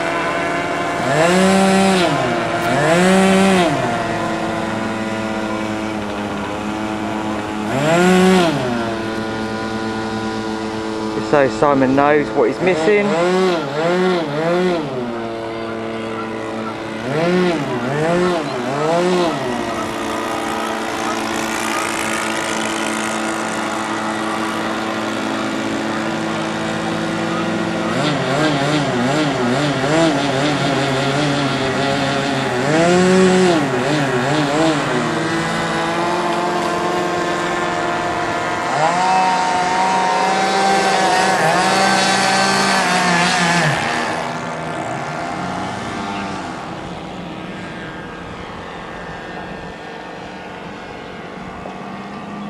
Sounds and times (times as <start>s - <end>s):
Vehicle: 0.0s - 52.5s.